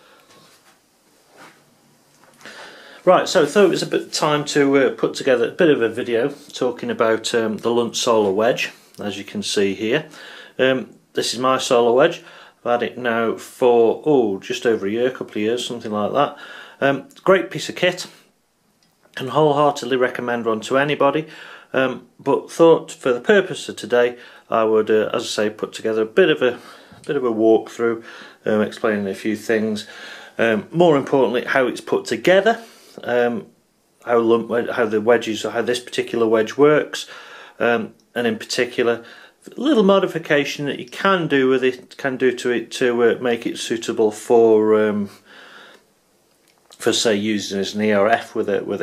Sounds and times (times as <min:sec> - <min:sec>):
Speech: 0:03.0 - 0:18.2, 0:19.2 - 0:45.2, 0:46.7 - 0:48.8.